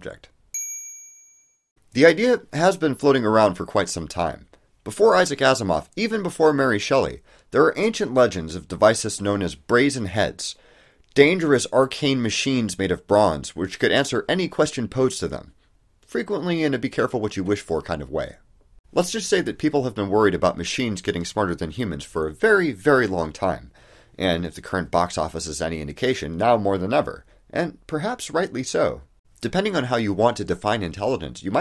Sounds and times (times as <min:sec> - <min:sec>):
Narration, monologue: 0:00.0 - 0:00.5, 0:01.8 - 0:31.6.